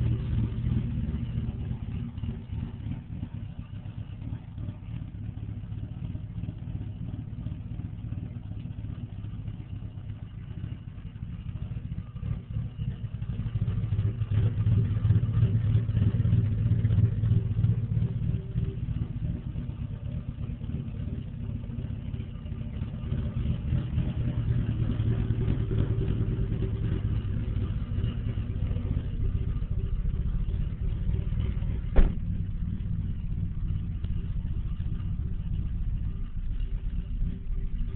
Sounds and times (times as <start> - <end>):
Car: 0.0 - 37.9.